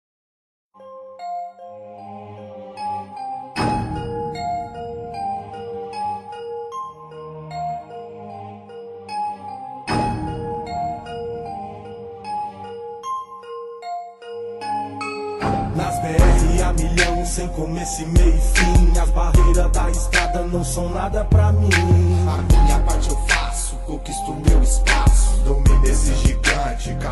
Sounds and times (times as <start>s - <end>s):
Music: 0.7s - 27.1s.